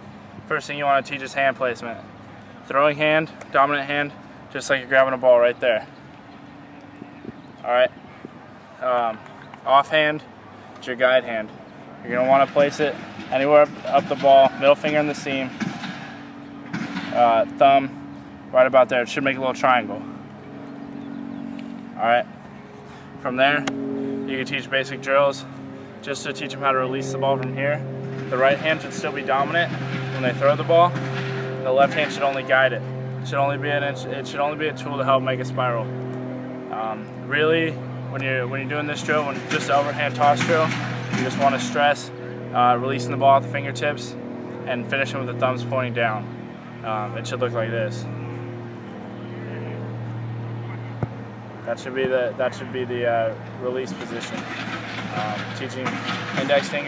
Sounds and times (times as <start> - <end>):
Speech: 0.5 - 2.0, 2.7 - 5.9, 8.8 - 11.5, 12.1 - 15.5, 17.2 - 17.9, 18.6 - 20.1, 22.0 - 22.3, 23.2 - 23.7, 24.3 - 25.5, 26.1 - 27.8, 28.4 - 30.9, 31.6 - 35.9, 36.8 - 46.3, 46.9 - 48.1, 51.7 - 54.4, 55.1 - 56.8.